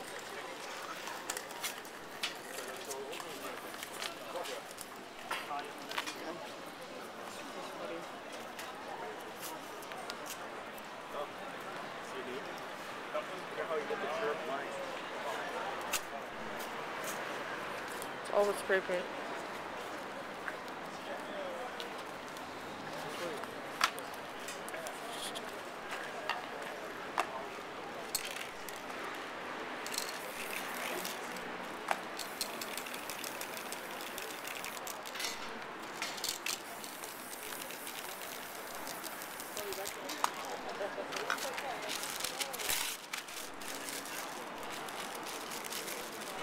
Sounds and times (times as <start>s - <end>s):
Spray: 36.2s - 40.0s.